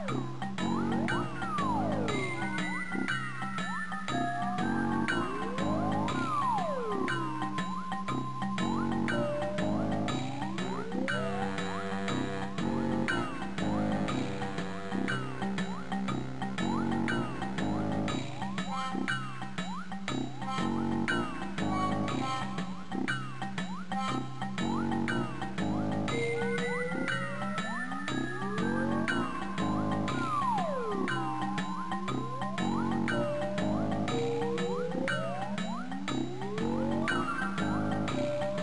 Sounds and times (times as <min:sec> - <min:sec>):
Music: 0:00.0 - 0:38.6.